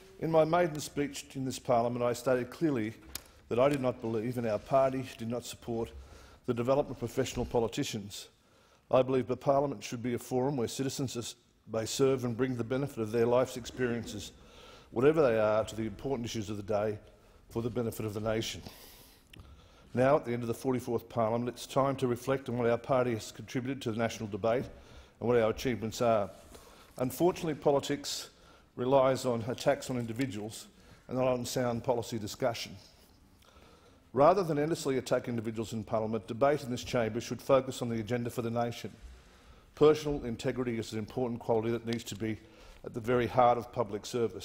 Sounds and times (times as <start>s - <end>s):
Narration, monologue: 0.0s - 44.4s
Male speech, man speaking: 0.2s - 8.3s, 8.9s - 14.4s, 15.0s - 18.7s, 20.0s - 26.4s, 27.0s - 32.9s, 34.2s - 39.0s, 39.8s - 44.4s.